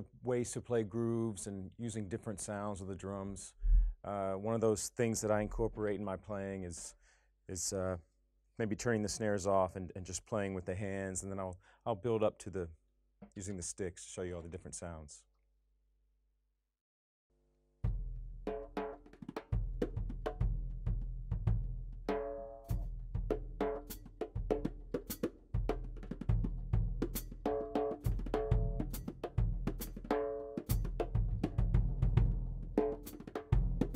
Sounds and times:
Drum: 0:17.9 - 0:33.9.

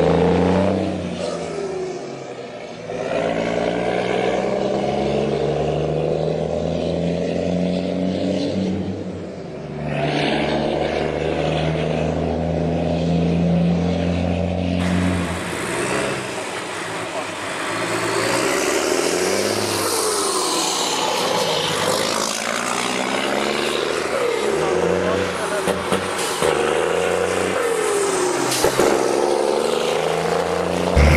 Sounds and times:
Truck: 0:00.0 - 0:31.1
Speech: 0:24.9 - 0:25.9.

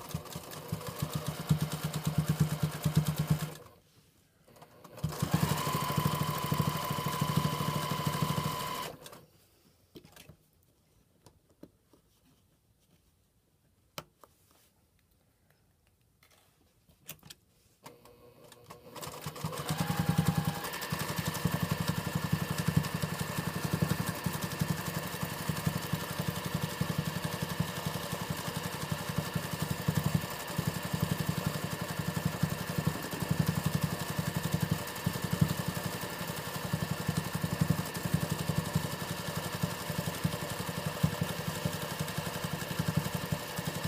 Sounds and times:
Sewing machine: 0:00.0 - 0:03.8, 0:04.5 - 0:09.2, 0:17.8 - 0:43.8
Inside, small room: 0:00.0 - 0:43.8.

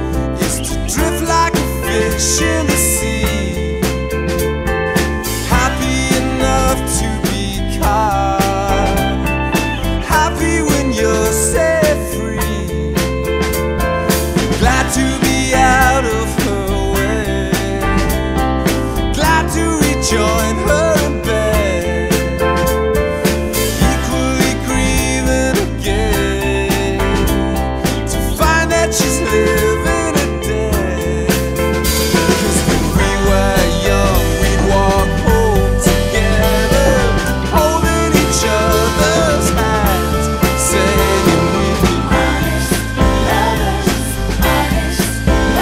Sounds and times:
Music: 0:00.0 - 0:45.6.

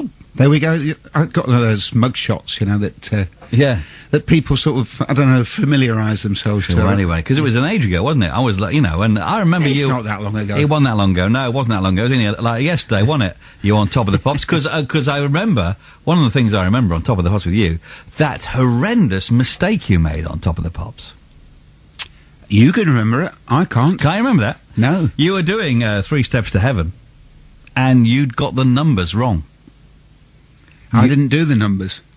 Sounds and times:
Speech: 0:00.0 - 0:21.2, 0:22.5 - 0:27.0, 0:27.8 - 0:29.5, 0:30.9 - 0:32.1.

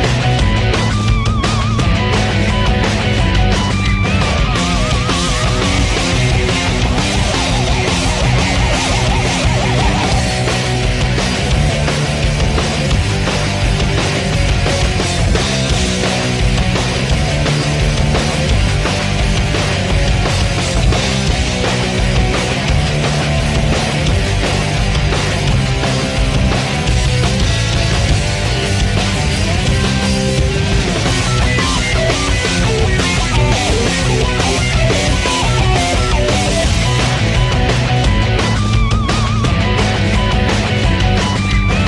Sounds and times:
Exciting music: 0:00.0 - 0:41.8.

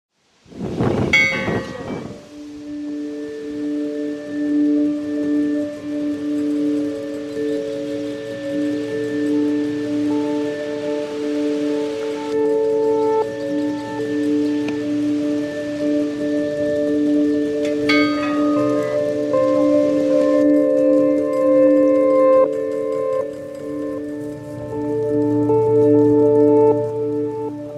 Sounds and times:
Outside, rural or natural: 0:00.1 - 0:27.7
Music: 0:00.5 - 0:27.7.

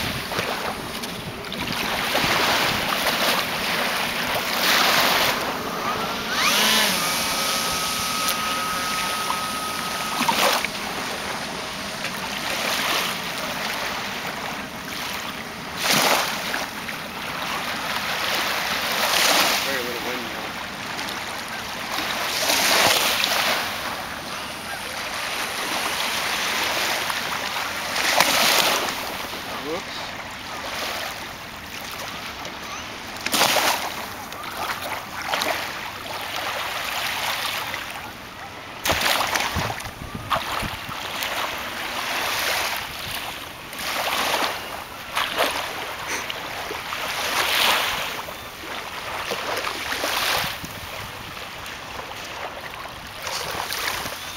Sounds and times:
Speech: 0:19.6 - 0:20.4, 0:29.5 - 0:30.1.

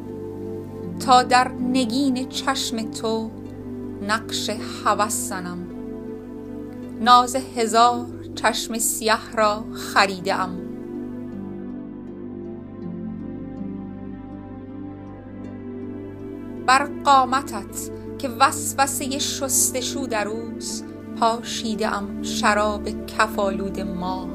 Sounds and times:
Music: 0:00.0 - 0:24.3
Speech: 0:01.0 - 0:03.3, 0:04.0 - 0:05.7, 0:07.0 - 0:10.6, 0:16.7 - 0:24.3.

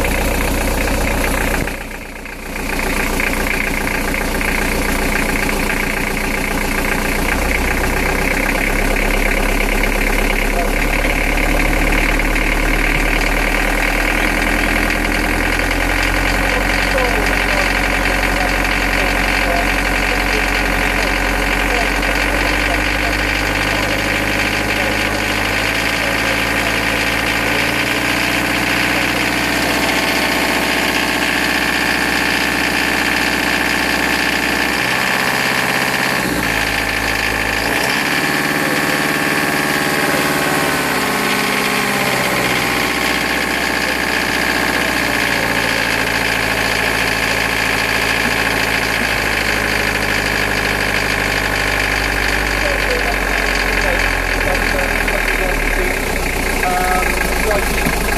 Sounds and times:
Vibration: 0:00.0 - 0:58.1.

